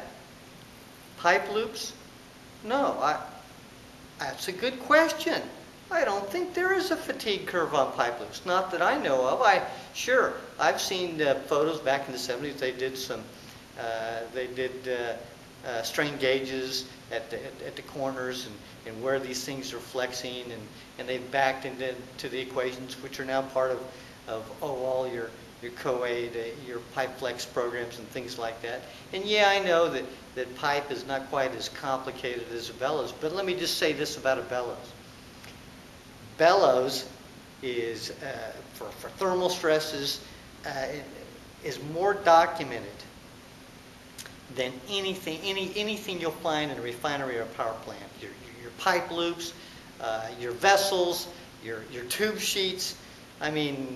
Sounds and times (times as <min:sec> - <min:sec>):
Speech: 0:00.0 - 0:00.2, 0:01.2 - 0:02.0, 0:02.6 - 0:03.5, 0:04.2 - 0:35.0, 0:36.4 - 0:43.1, 0:44.5 - 0:53.9.